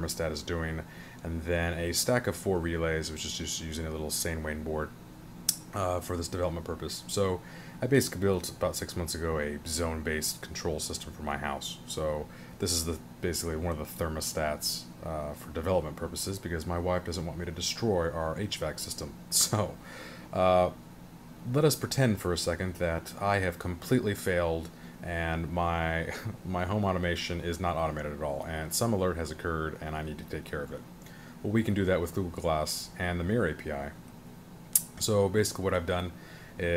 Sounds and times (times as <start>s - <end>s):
Speech: 0.0s - 20.8s, 21.4s - 34.0s, 34.8s - 36.7s.